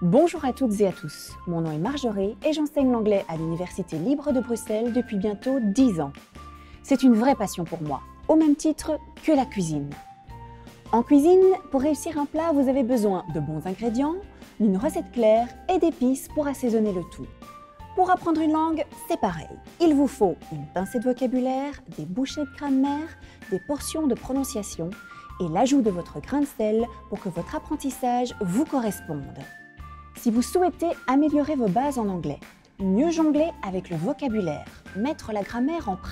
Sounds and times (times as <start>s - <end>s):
Speech: 0.0s - 6.2s, 6.8s - 10.0s, 10.9s - 17.3s, 18.0s - 29.5s, 30.2s - 36.1s
Music: 0.0s - 36.1s.